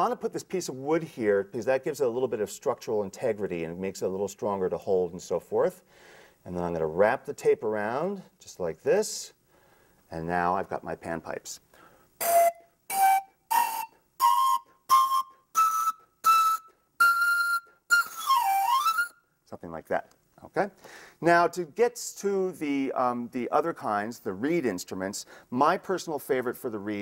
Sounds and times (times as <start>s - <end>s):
Speech: 0.0s - 5.8s, 6.5s - 9.4s, 10.1s - 11.6s, 19.5s - 27.0s
Wind instrument, woodwind instrument: 12.2s - 19.3s.